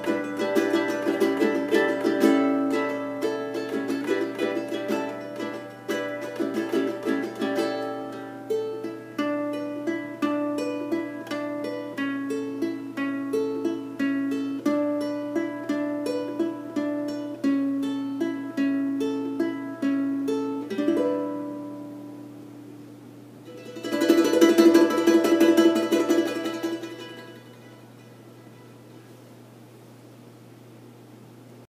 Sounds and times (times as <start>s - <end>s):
Mandolin: 0.0s - 22.4s, 23.4s - 29.1s
Guitar: 0.0s - 29.1s
Ukulele: 0.0s - 29.1s.